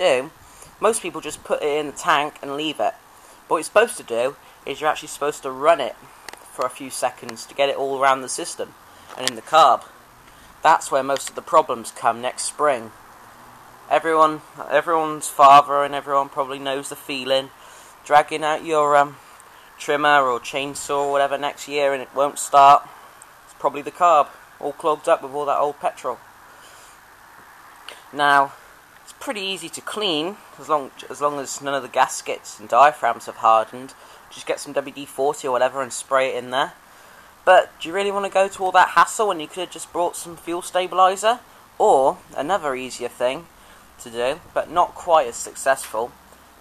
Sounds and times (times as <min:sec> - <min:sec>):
Speech: 0:00.0 - 0:09.9, 0:10.6 - 0:13.0, 0:13.9 - 0:19.2, 0:19.8 - 0:22.9, 0:23.5 - 0:26.2, 0:27.9 - 0:36.8, 0:37.5 - 0:46.2.